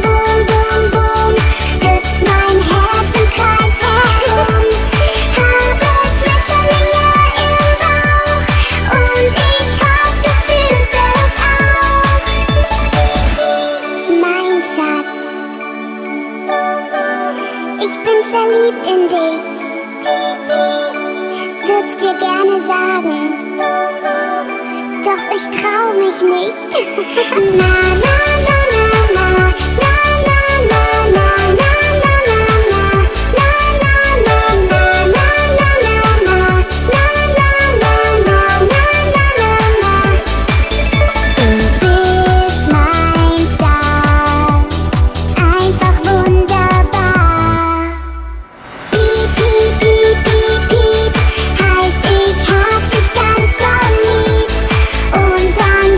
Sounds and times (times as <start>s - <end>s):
Music: 0.0s - 55.9s.